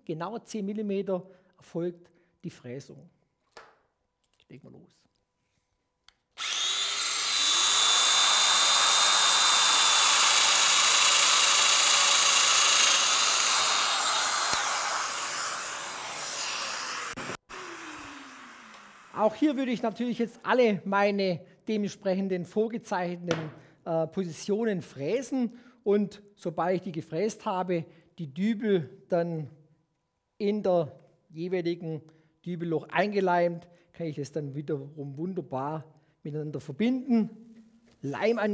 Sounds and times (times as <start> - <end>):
Drill: 6.4 - 19.3.